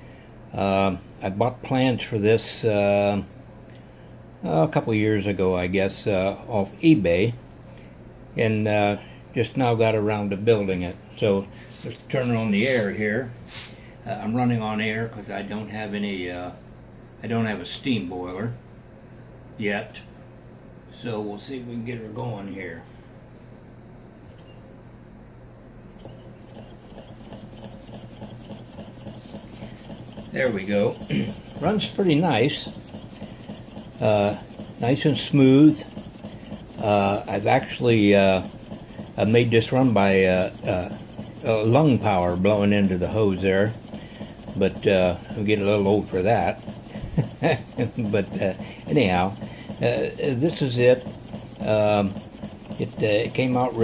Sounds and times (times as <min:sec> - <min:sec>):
Speech: 0:00.6 - 0:03.3, 0:04.4 - 0:07.4, 0:08.4 - 0:13.4, 0:14.0 - 0:16.6, 0:17.2 - 0:18.6, 0:19.6 - 0:20.1, 0:20.9 - 0:22.9, 0:30.3 - 0:32.8, 0:34.0 - 0:35.9, 0:36.8 - 0:38.5, 0:39.2 - 0:43.8, 0:44.5 - 0:46.6, 0:47.4 - 0:52.2, 0:52.8 - 0:53.8.